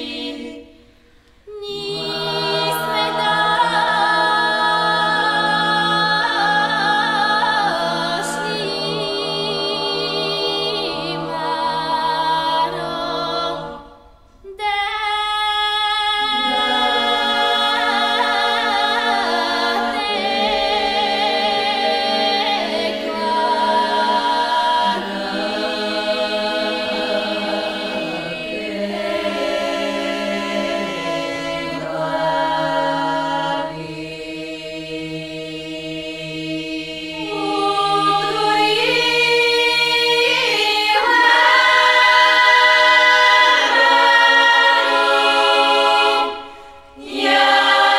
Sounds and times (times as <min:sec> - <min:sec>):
A capella: 0:00.0 - 0:47.9
Choir: 0:00.0 - 0:47.9.